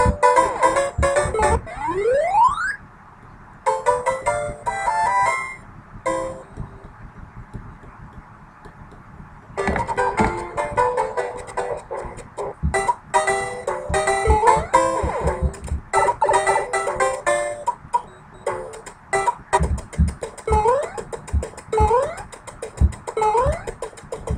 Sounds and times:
Music: 0:00.0 - 0:01.6, 0:03.7 - 0:06.6, 0:09.6 - 0:24.3.

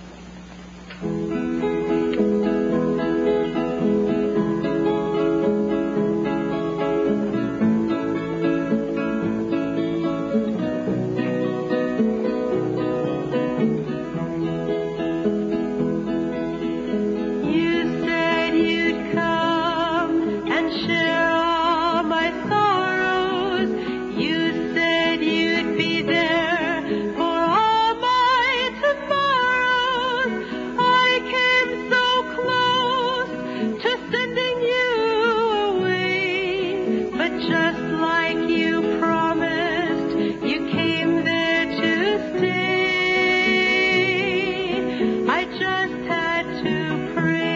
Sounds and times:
Ukulele: 0:00.0 - 0:47.5.

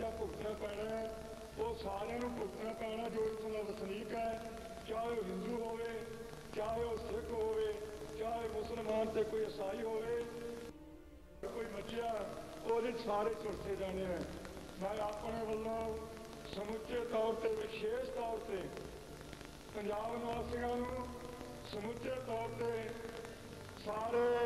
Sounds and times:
Male speech, man speaking: 0:00.0 - 0:10.5, 0:11.4 - 0:18.8, 0:19.7 - 0:23.2, 0:23.8 - 0:24.4
Narration, monologue: 0:00.0 - 0:24.4.

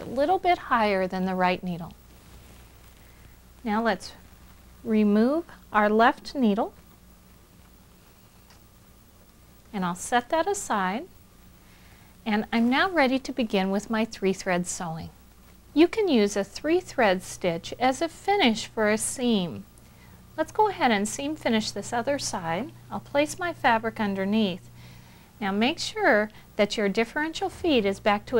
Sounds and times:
Speech: 0:00.0 - 0:02.0, 0:03.6 - 0:04.2, 0:04.8 - 0:06.8, 0:09.7 - 0:11.1, 0:12.2 - 0:15.2, 0:15.8 - 0:19.6, 0:20.4 - 0:24.6, 0:25.4 - 0:28.3.

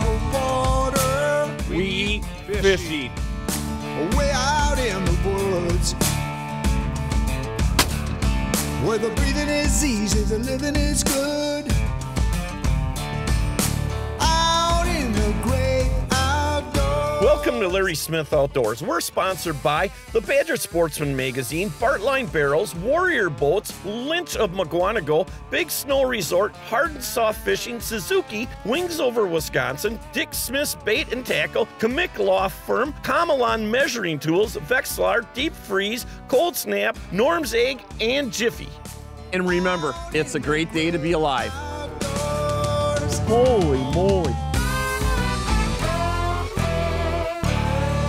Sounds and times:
Music: 0:00.0 - 0:48.0
Speech: 0:01.6 - 0:03.2, 0:04.0 - 0:06.0, 0:17.2 - 0:41.6, 0:43.0 - 0:44.4.

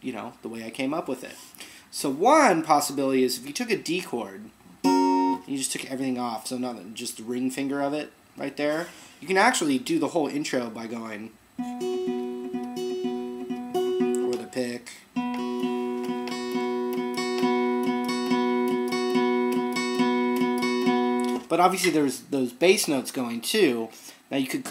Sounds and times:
Speech: 0:00.0 - 0:04.6, 0:05.4 - 0:11.4, 0:14.2 - 0:15.0, 0:21.5 - 0:24.7
Acoustic guitar: 0:04.8 - 0:05.4, 0:11.6 - 0:21.9.

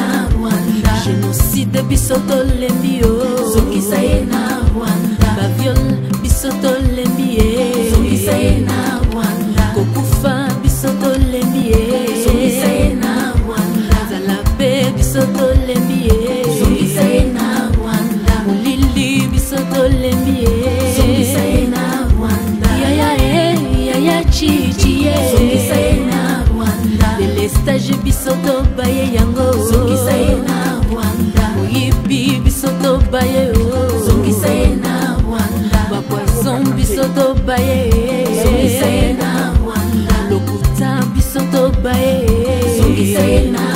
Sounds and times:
Music: 0:00.0 - 0:43.7.

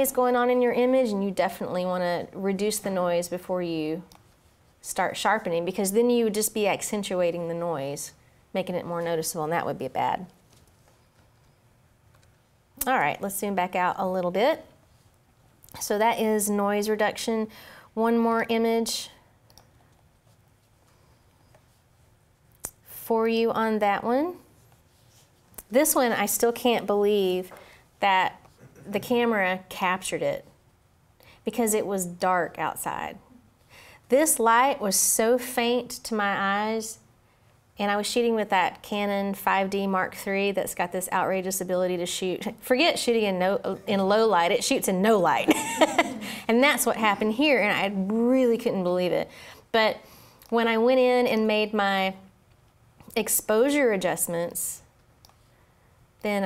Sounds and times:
Speech: 0:00.0 - 0:04.1, 0:04.8 - 0:10.3, 0:12.8 - 0:14.7, 0:15.8 - 0:19.2, 0:25.7 - 0:30.5, 0:34.1 - 0:37.0, 0:37.8 - 0:45.5, 0:46.5 - 0:52.2, 0:53.1 - 0:54.9, 0:56.2 - 0:56.4.

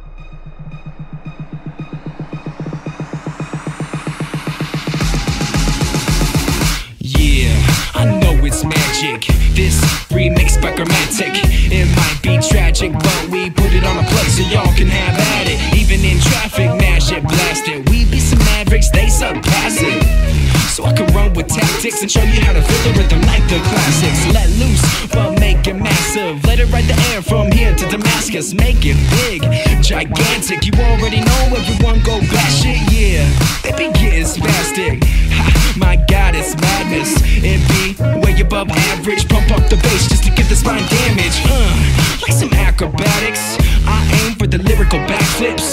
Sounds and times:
Music: 0:00.0 - 0:45.7.

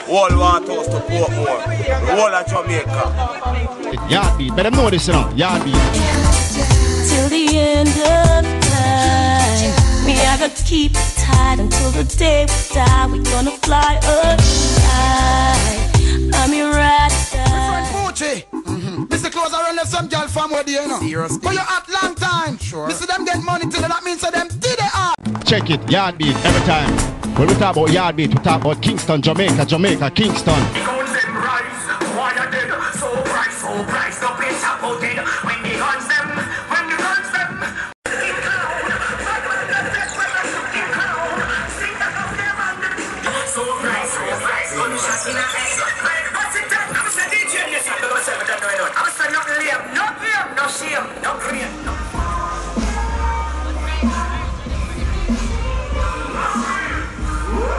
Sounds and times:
Speech: 0:00.0 - 0:05.9, 0:17.8 - 0:34.2
Music: 0:00.0 - 0:57.7.

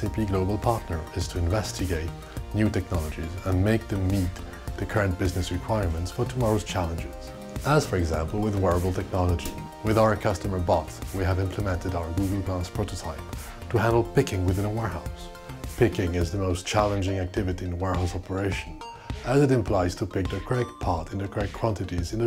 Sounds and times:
Music: 0:00.0 - 0:22.2
Speech: 0:00.0 - 0:22.2.

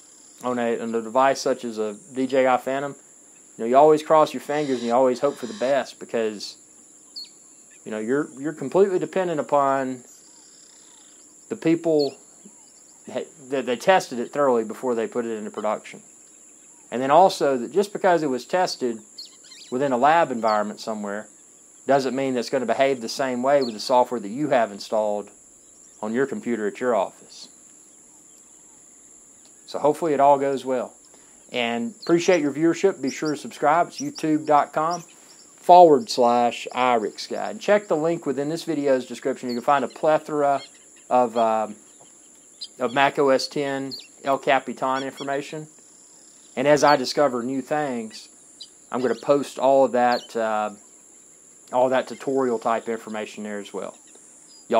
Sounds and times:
Cricket: 0:00.0 - 0:54.8.

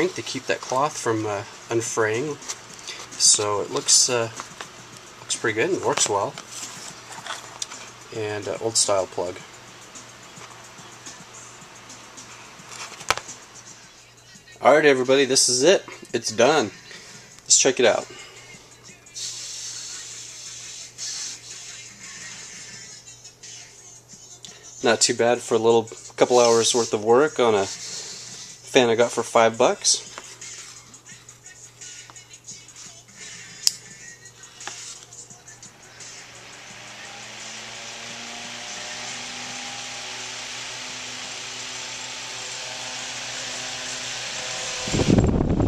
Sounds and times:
Mechanical fan: 0:00.0 - 0:22.6, 0:33.9 - 0:45.6
Music: 0:00.0 - 0:45.6.

